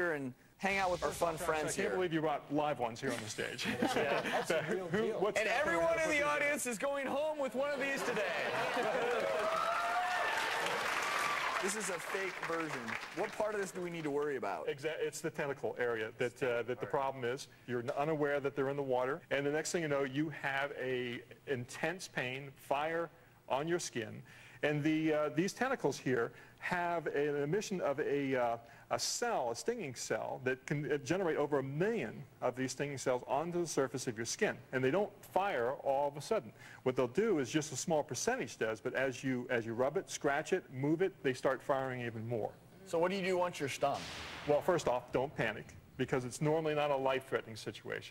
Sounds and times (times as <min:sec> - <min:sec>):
Speech: 0:11.6 - 0:48.1.